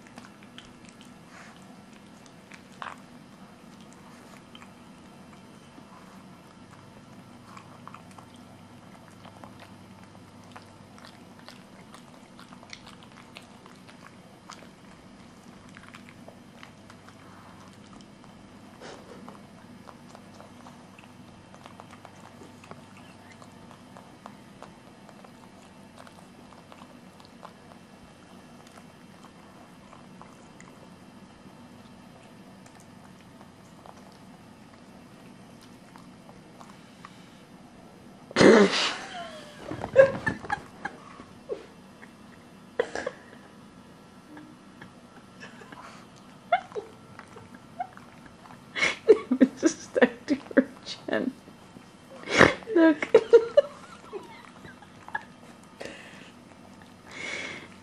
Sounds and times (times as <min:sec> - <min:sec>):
Chewing, mastication: 0:00.0 - 0:37.8, 0:44.8 - 0:52.3, 0:53.0 - 0:57.8.